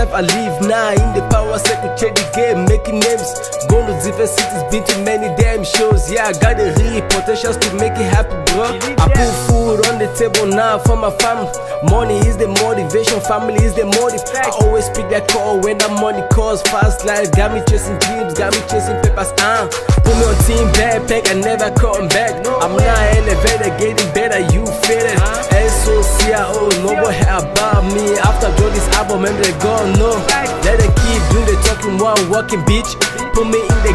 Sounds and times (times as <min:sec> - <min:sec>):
Music: 0:00.0 - 0:33.9.